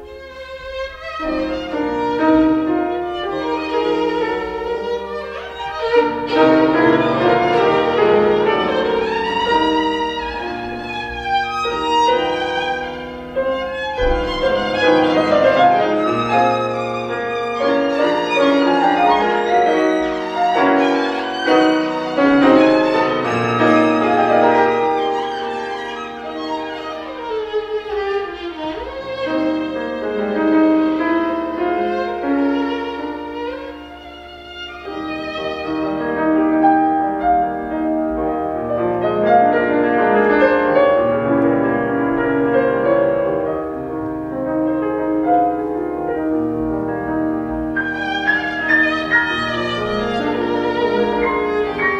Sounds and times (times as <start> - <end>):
Violin, fiddle: 0.0 - 51.9.